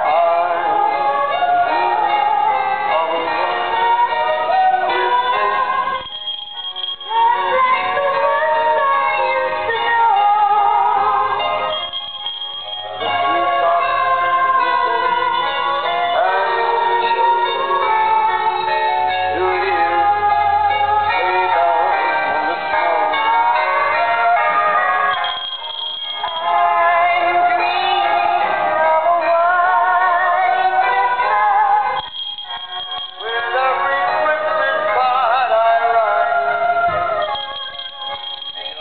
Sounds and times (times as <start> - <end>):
Female singing: 0.0 - 6.1, 7.1 - 11.7, 13.0 - 25.2, 26.2 - 32.1
Male singing: 0.0 - 6.1, 13.0 - 25.2, 26.2 - 32.1, 33.1 - 37.3
Synthetic singing: 0.0 - 6.1, 7.0 - 11.7, 12.9 - 38.8
Music: 0.0 - 38.8.